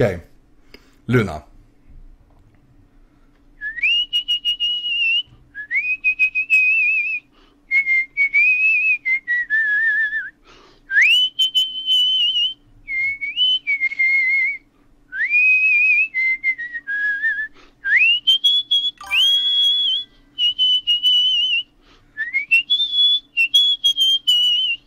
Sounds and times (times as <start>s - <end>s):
Whistle: 3.6s - 24.8s.